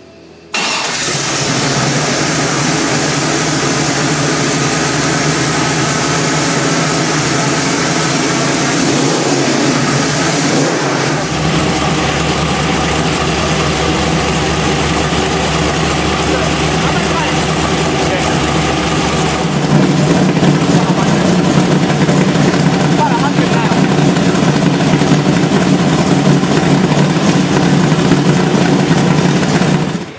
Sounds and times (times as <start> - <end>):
Vehicle: 0.0 - 30.1.